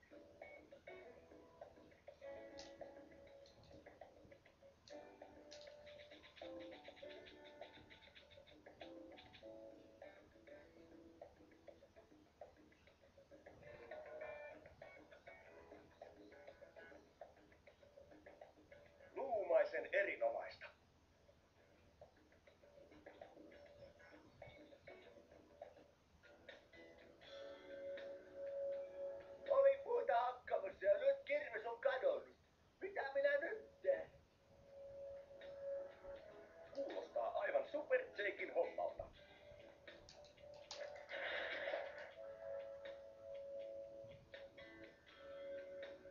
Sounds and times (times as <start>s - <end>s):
Music: 0.0s - 46.1s
Speech: 19.2s - 20.8s, 29.5s - 34.2s, 36.9s - 39.1s.